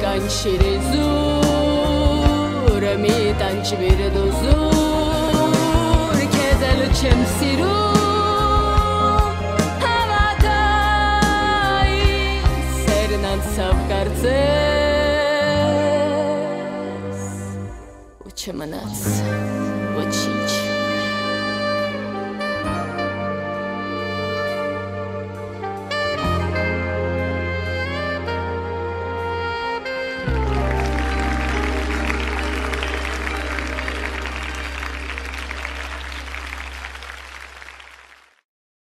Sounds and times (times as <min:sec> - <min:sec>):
Saxophone: 0:00.0 - 0:18.2, 0:19.0 - 0:38.0.